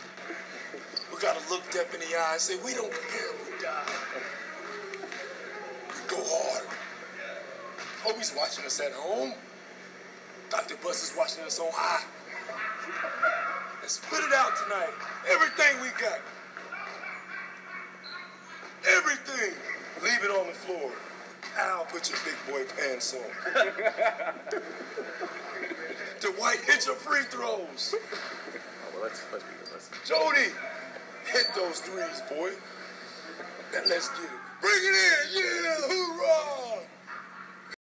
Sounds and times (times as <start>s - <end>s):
Male speech, man speaking: 1.1s - 4.4s, 5.9s - 7.4s, 8.0s - 9.4s, 10.5s - 12.1s, 13.8s - 16.2s, 18.8s - 23.4s, 25.4s - 28.0s, 28.8s - 32.6s, 33.7s - 36.9s.